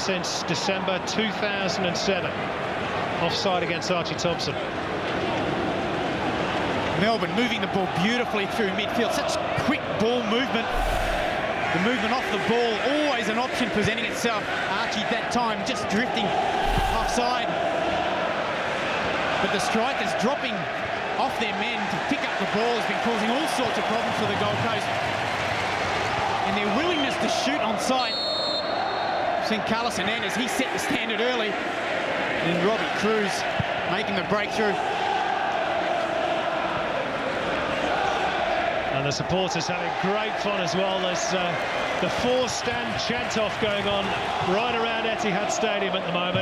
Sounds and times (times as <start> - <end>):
Speech: 0.0 - 2.3, 3.2 - 4.7, 7.0 - 10.8, 11.7 - 17.6, 19.4 - 24.9, 26.4 - 28.2, 29.4 - 31.6, 32.4 - 34.8, 38.9 - 46.4.